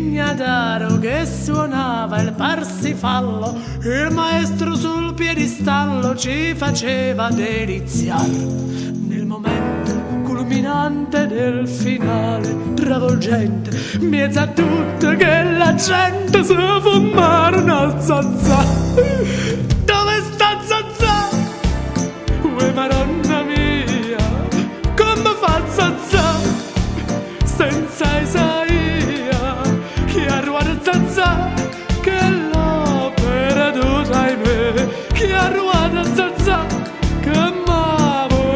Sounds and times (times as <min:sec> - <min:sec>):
Music: 0:00.0 - 0:38.5.